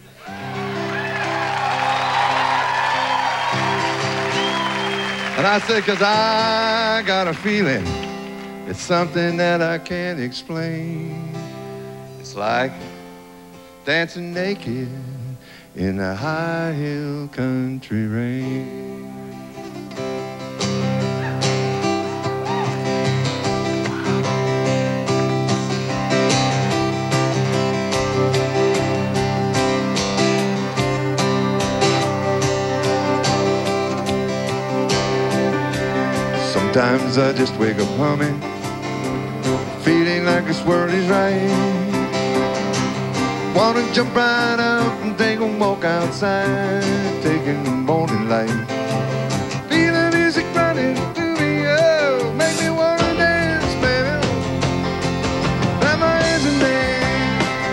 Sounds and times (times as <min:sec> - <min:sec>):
Country: 0:00.0 - 0:57.7.